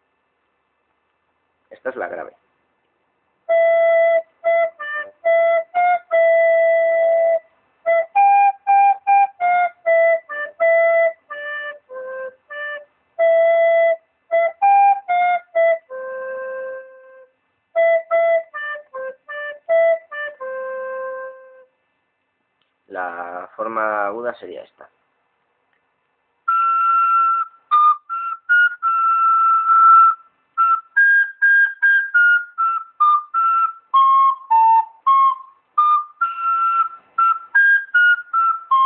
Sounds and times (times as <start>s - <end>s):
Speech: 1.7s - 2.4s, 22.9s - 25.0s
Flute: 3.4s - 21.9s, 26.4s - 38.8s.